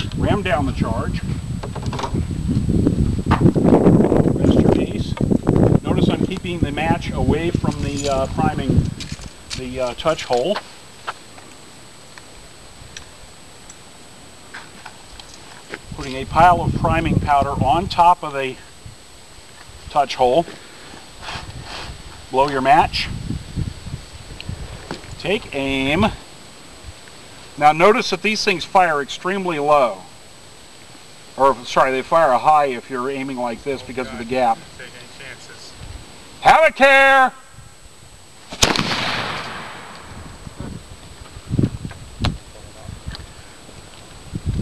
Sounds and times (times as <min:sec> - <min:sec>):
Speech: 0:00.0 - 0:01.2, 0:04.4 - 0:05.2, 0:05.8 - 0:08.8, 0:09.6 - 0:10.6, 0:16.0 - 0:18.6, 0:19.9 - 0:20.5, 0:22.3 - 0:23.1, 0:25.2 - 0:26.2, 0:27.6 - 0:30.1, 0:31.4 - 0:35.8, 0:36.4 - 0:37.4, 0:42.6 - 0:43.0.